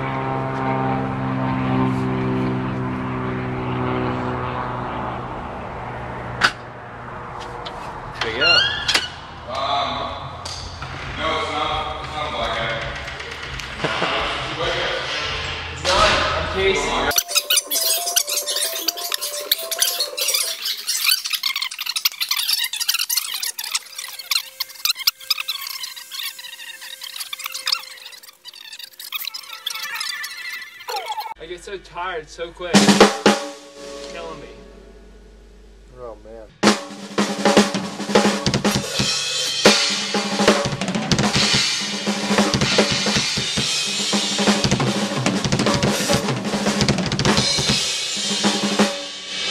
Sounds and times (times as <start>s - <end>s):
Speech: 11.2s - 12.9s, 13.9s - 17.1s, 30.9s - 32.9s, 35.9s - 36.5s.